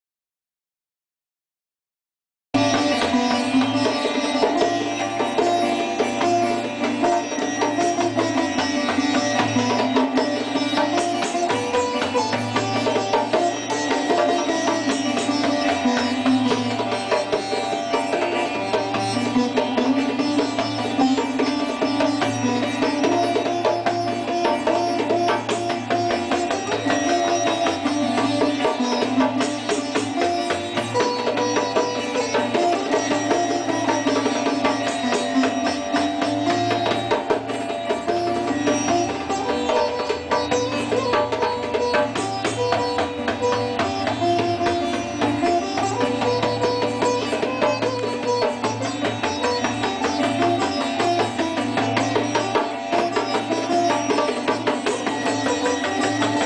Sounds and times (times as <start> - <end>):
Bowed string instrument: 2.6 - 56.4
Sitar: 2.6 - 56.4.